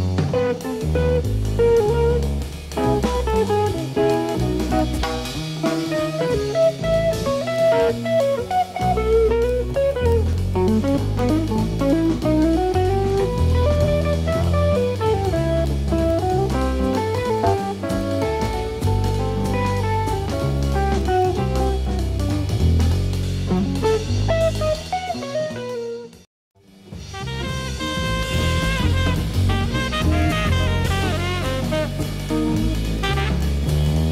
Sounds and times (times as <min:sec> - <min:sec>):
Rimshot: 0:00.0 - 0:26.2, 0:26.9 - 0:34.1
Drum kit: 0:00.0 - 0:34.1.